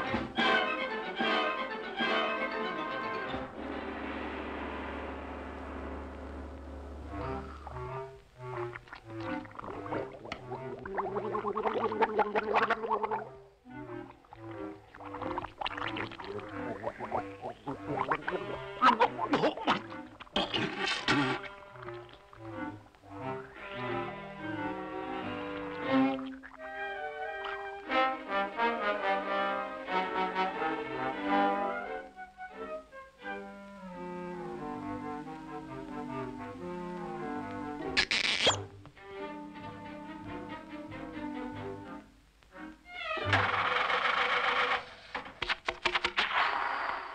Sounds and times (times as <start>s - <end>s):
Music: 0.0s - 43.7s.